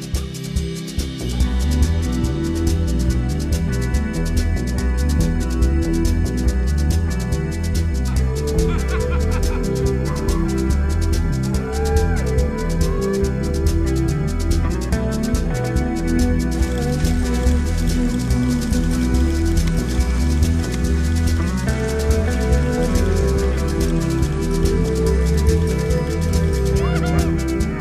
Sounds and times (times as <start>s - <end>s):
Music: 0.0s - 27.8s.